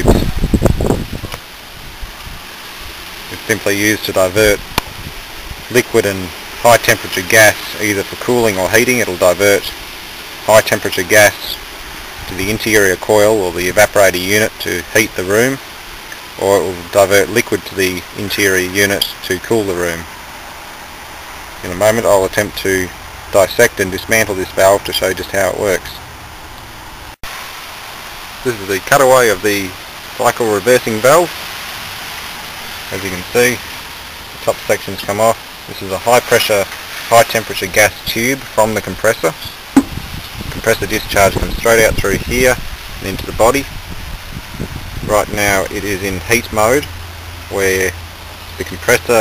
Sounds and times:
Speech: 0:00.0 - 0:00.3, 0:03.3 - 0:04.6, 0:05.7 - 0:09.8, 0:10.5 - 0:11.6, 0:12.3 - 0:15.6, 0:16.4 - 0:20.1, 0:21.6 - 0:26.0, 0:28.4 - 0:31.4, 0:32.9 - 0:33.6, 0:34.4 - 0:39.6, 0:40.5 - 0:43.7, 0:45.1 - 0:46.9, 0:47.5 - 0:48.0, 0:48.6 - 0:49.2.

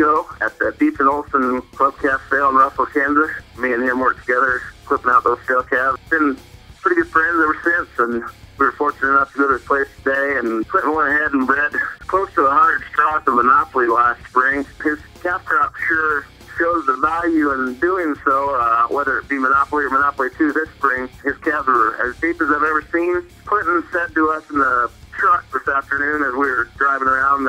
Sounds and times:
Music: 0:00.0 - 0:27.4
Speech: 0:00.0 - 0:27.4.

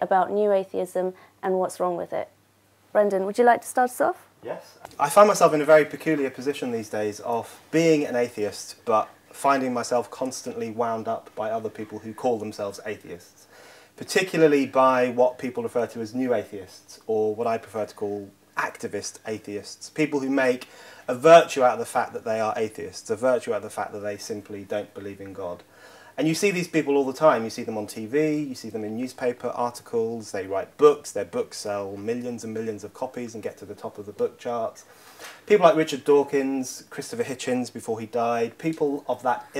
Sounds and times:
Speech: 0:03.0 - 0:13.3, 0:14.0 - 0:25.6, 0:26.2 - 0:34.8, 0:35.5 - 0:39.5.

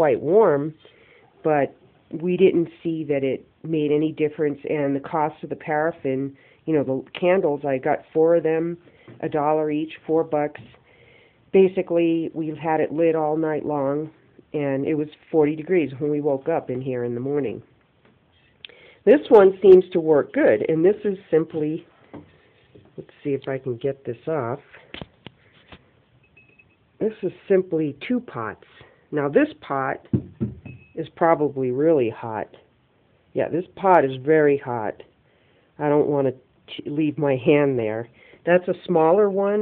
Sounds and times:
Speech: 0:00.0 - 0:00.8, 0:01.4 - 0:10.8, 0:11.6 - 0:17.7, 0:19.1 - 0:21.9, 0:23.0 - 0:24.8, 0:27.0 - 0:30.1, 0:31.0 - 0:32.7, 0:33.4 - 0:35.1, 0:35.8 - 0:39.6
Inside, small room: 0:00.0 - 0:39.6.

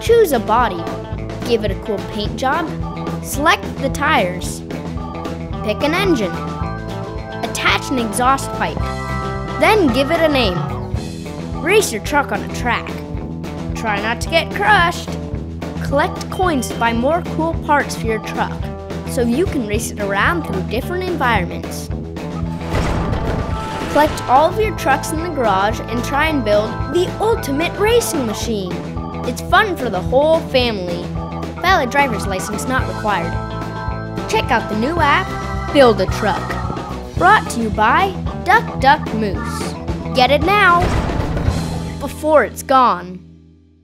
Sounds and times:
Speech: 0:00.0 - 0:02.7, 0:03.3 - 0:04.6, 0:05.6 - 0:06.4, 0:07.4 - 0:08.8, 0:09.6 - 0:10.7, 0:11.6 - 0:13.0, 0:13.8 - 0:15.2, 0:15.8 - 0:18.6, 0:19.2 - 0:21.9, 0:23.9 - 0:33.4, 0:34.3 - 0:36.5, 0:37.2 - 0:40.9, 0:42.0 - 0:43.2
Music: 0:00.0 - 0:43.8.

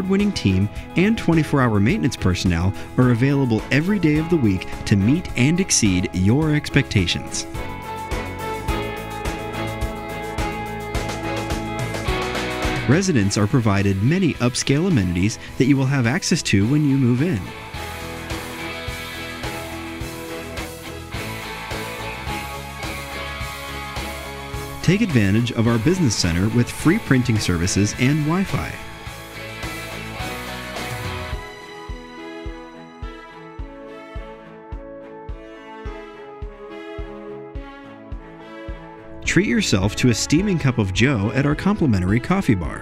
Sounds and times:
Speech: 0:00.0 - 0:07.5, 0:12.9 - 0:17.6, 0:24.8 - 0:28.9, 0:39.2 - 0:42.8
Music: 0:00.0 - 0:42.8.

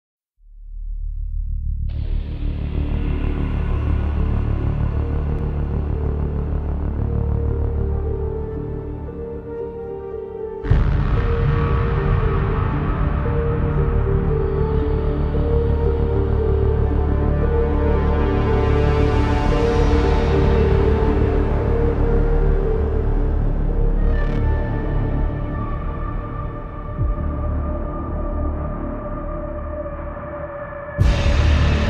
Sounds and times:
Soundtrack music: 0:01.7 - 0:31.8.

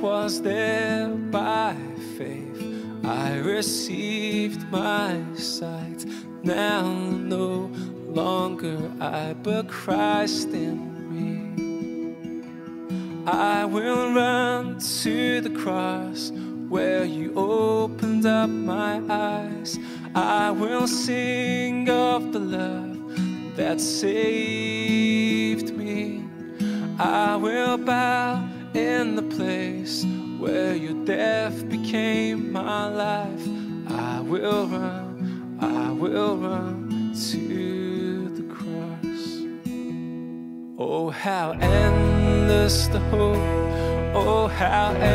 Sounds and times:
Music: 0:00.0 - 0:45.1.

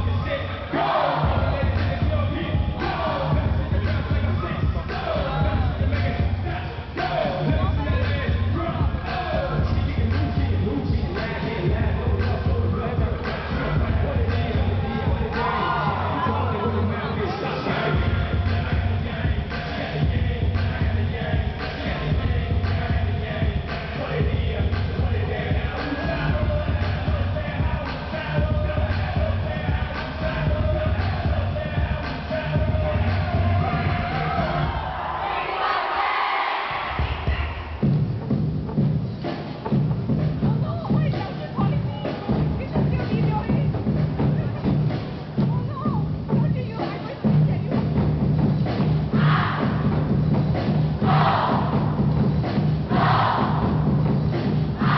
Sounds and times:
Music: 0:00.0 - 0:36.1, 0:36.7 - 0:54.9.

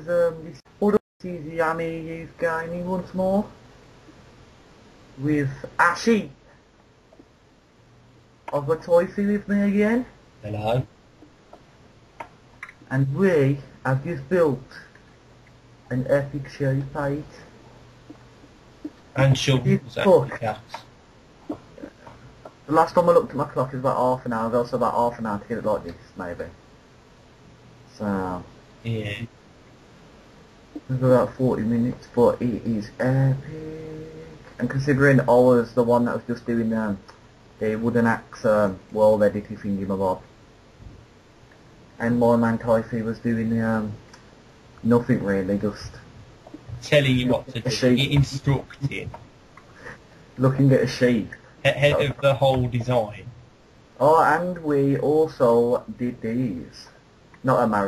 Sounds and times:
Speech: 0:00.0 - 0:03.6, 0:05.2 - 0:06.4, 0:08.5 - 0:10.9, 0:12.6 - 0:14.9, 0:15.9 - 0:17.5, 0:19.2 - 0:20.8, 0:22.7 - 0:26.6, 0:27.9 - 0:29.3, 0:30.8 - 0:40.2, 0:42.0 - 0:44.0, 0:44.8 - 0:46.0, 0:46.7 - 0:49.2, 0:50.4 - 0:53.3, 0:54.0 - 0:57.8.

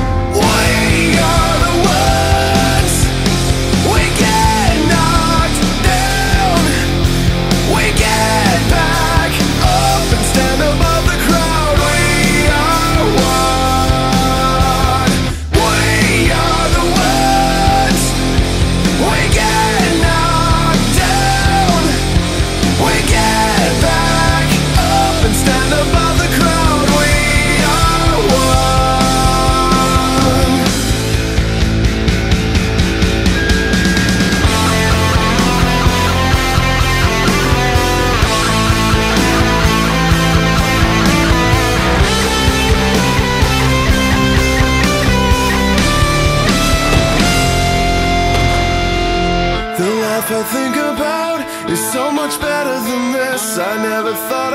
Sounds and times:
Grunge: 0:00.0 - 0:54.5.

